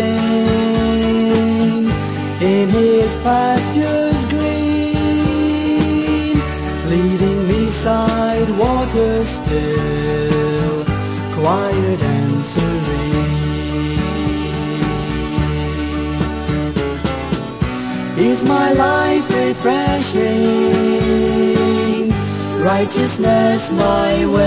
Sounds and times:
Gospel music: 0:00.0 - 0:24.4.

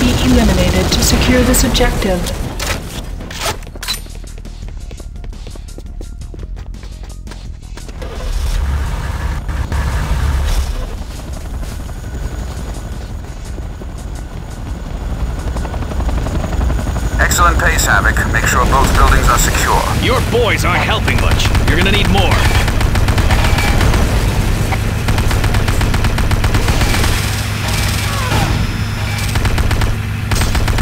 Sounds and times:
Music: 0:02.8 - 0:08.7, 0:12.3 - 0:16.8.

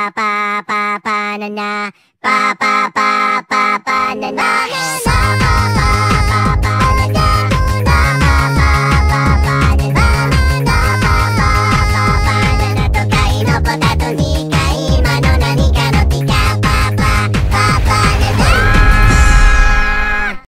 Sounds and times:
Electronic music: 0:04.0 - 0:20.4.

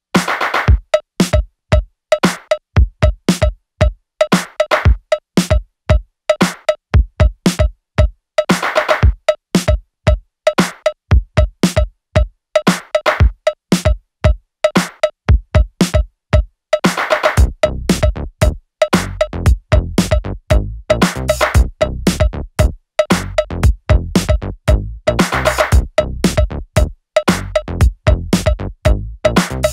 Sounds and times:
Music: 0:00.1 - 0:29.7.

